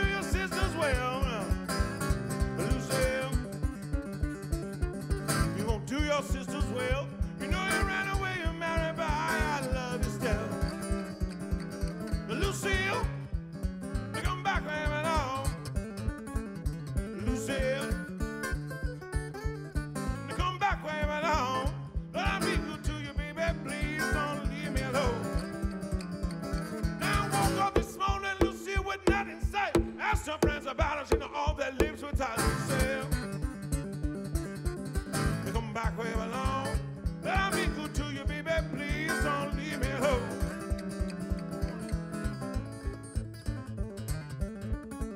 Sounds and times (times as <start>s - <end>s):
Electric guitar: 0.0s - 45.1s.